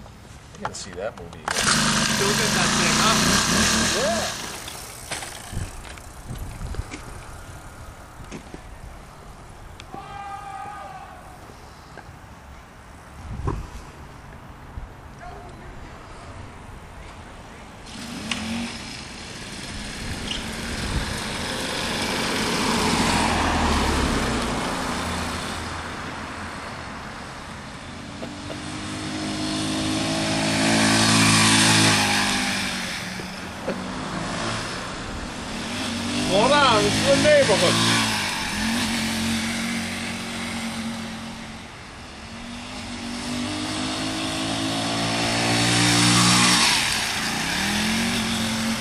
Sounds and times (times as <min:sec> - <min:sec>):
Vehicle: 0:00.0 - 0:48.8.